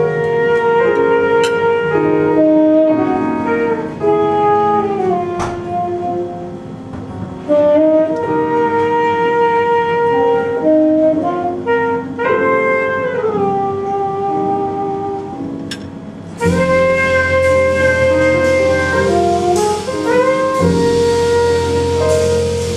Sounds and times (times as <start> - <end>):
Saxophone: 0.0 - 6.8, 7.4 - 22.7
Jazz: 0.0 - 22.7.